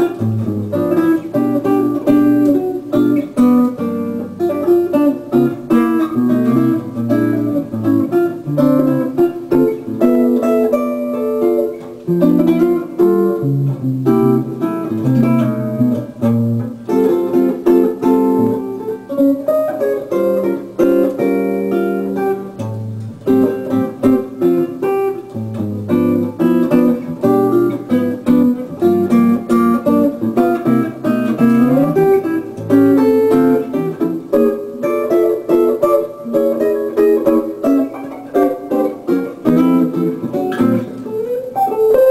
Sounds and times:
Guitar: 0.0s - 42.1s.

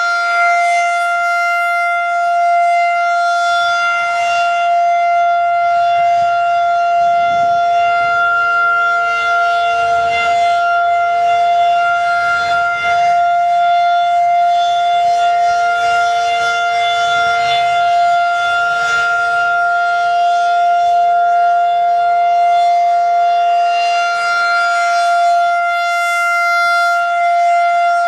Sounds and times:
Civil defense siren: 0.0s - 28.0s.

